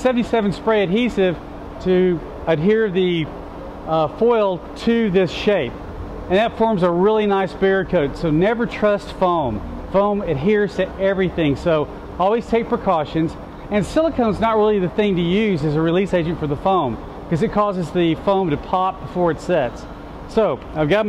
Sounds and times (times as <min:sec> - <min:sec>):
Speech: 0:00.0 - 0:03.3, 0:03.9 - 0:21.0.